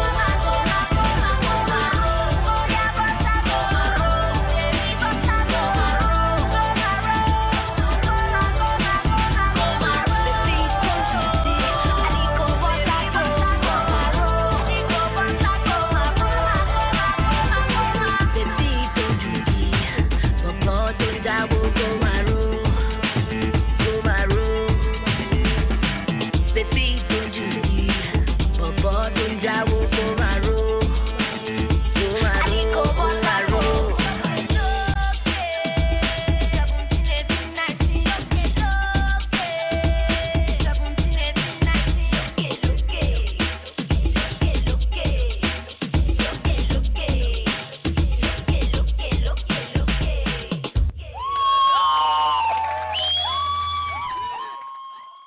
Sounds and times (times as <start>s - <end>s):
Afrobeat: 0.0s - 51.8s.